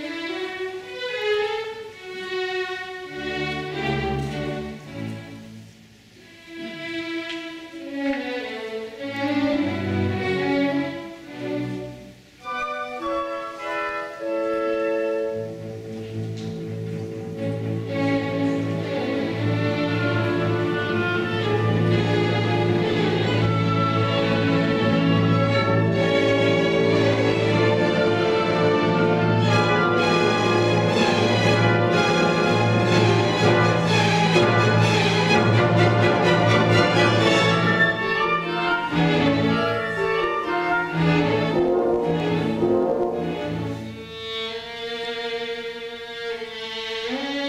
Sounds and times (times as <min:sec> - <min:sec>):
Violin, fiddle: 0:00.0 - 0:05.5, 0:06.2 - 0:47.4
Orchestra: 0:00.0 - 0:47.4.